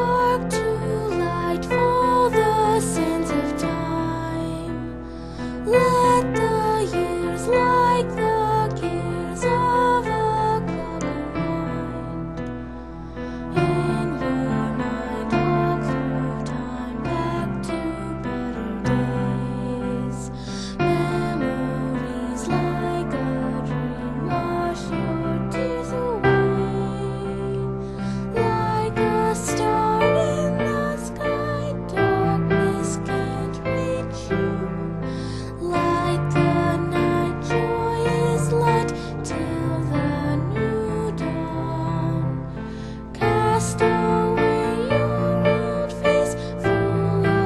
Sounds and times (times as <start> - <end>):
Female singing: 0.0 - 5.0, 5.6 - 12.3, 13.5 - 47.4
Music: 0.0 - 47.4.